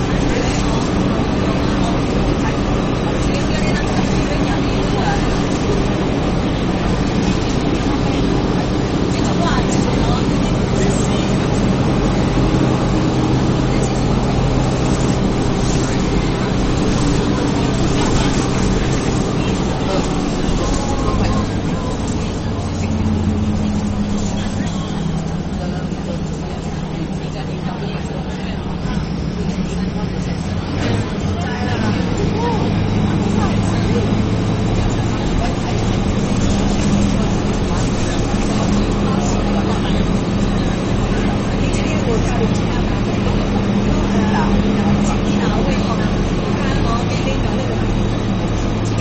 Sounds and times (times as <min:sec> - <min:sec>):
Bus: 0:00.0 - 0:49.0
Speech: 0:00.0 - 0:49.0.